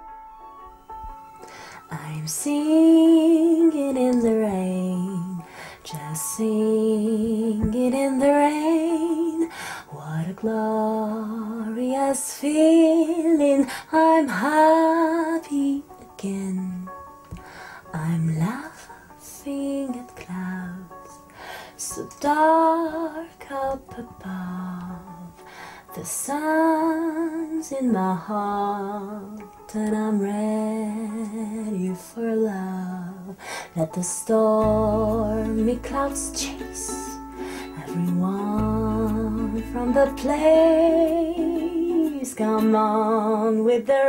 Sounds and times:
Music: 0.0s - 44.0s.

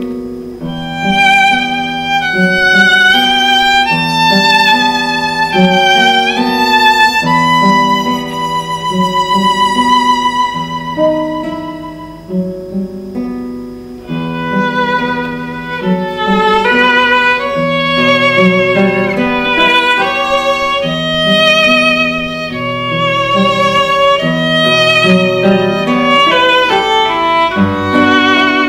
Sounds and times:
Acoustic guitar: 0.0s - 28.6s
Strum: 0.0s - 28.6s
Violin, fiddle: 0.6s - 12.5s, 14.0s - 28.6s.

